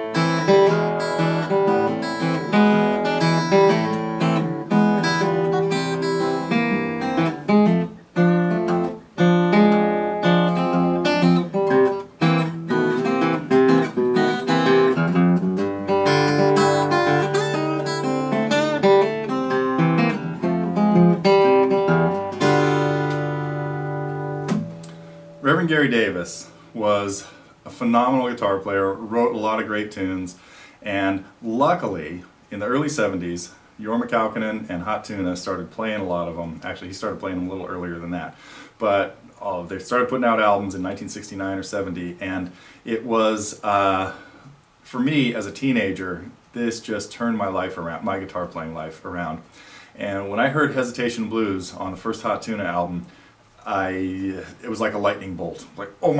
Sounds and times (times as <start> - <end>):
Speech: 25.4 - 44.2, 44.8 - 56.1.